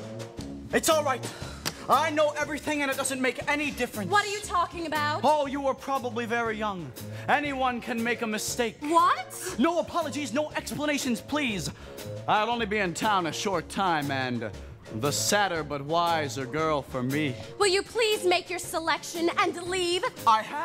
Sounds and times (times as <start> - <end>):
Background music: 0.0 - 20.6.